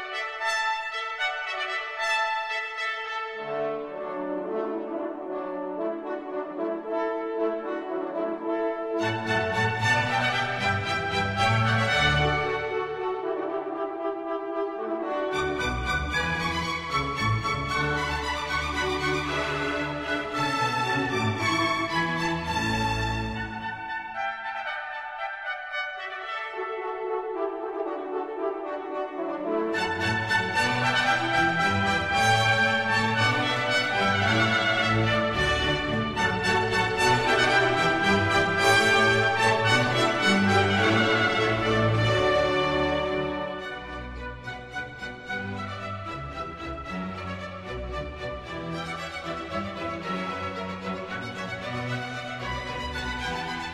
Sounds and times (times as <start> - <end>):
Orchestra: 0.0 - 53.7.